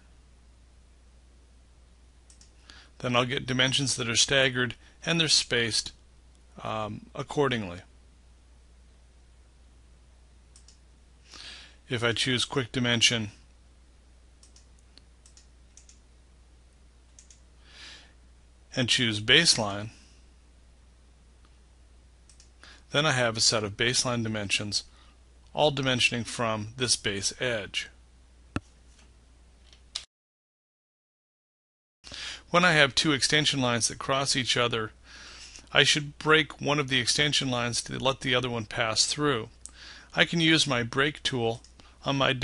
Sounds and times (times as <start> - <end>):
Speech: 3.0 - 6.0, 6.6 - 7.9, 11.9 - 13.4, 18.8 - 20.0, 22.9 - 24.9, 25.5 - 28.0, 32.5 - 35.0, 35.7 - 42.4.